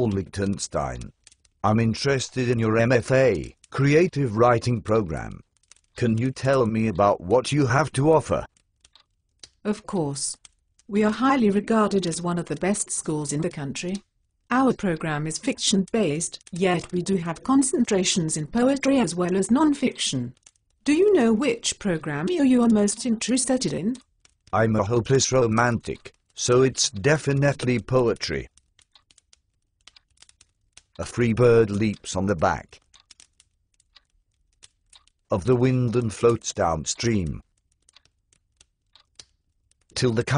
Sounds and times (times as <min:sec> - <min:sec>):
Speech: 0:00.0 - 0:01.1, 0:01.7 - 0:05.4, 0:06.0 - 0:08.5, 0:09.7 - 0:20.3, 0:20.9 - 0:24.0, 0:24.6 - 0:28.5, 0:31.0 - 0:32.8, 0:35.3 - 0:37.4, 0:40.0 - 0:40.3.